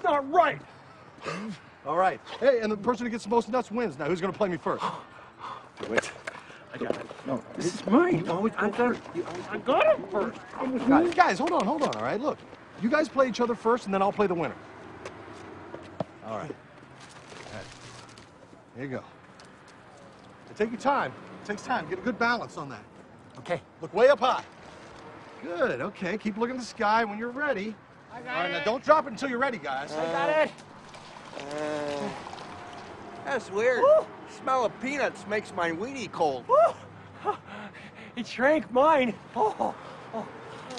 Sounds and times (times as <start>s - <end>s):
Pour: 30.8s - 33.0s.